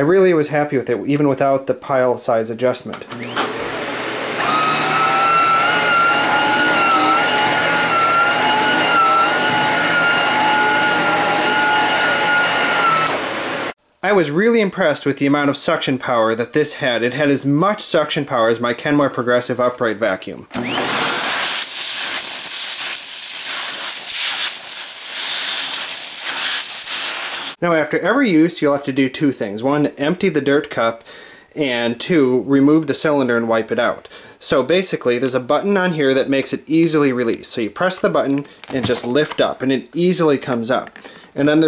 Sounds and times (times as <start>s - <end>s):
Vacuum cleaner: 3.1s - 13.8s, 20.5s - 27.6s.